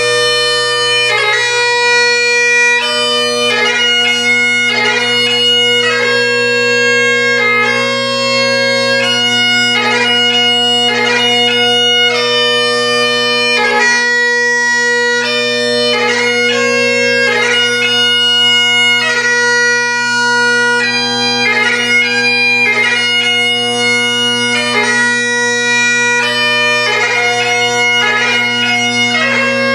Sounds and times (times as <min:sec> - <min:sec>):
Bagpipes: 0:00.0 - 0:29.7
Wind instrument, woodwind instrument: 0:00.0 - 0:29.7.